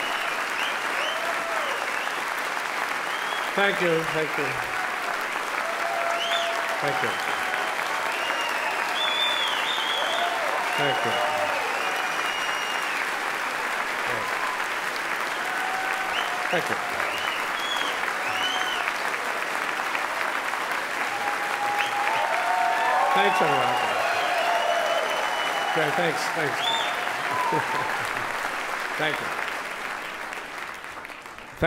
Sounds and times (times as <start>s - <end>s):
Applause: 0.0s - 31.6s
Speech: 3.6s - 4.6s, 6.8s - 7.2s, 10.8s - 11.2s, 16.5s - 16.8s, 23.1s - 23.9s, 25.8s - 26.6s, 29.0s - 29.3s.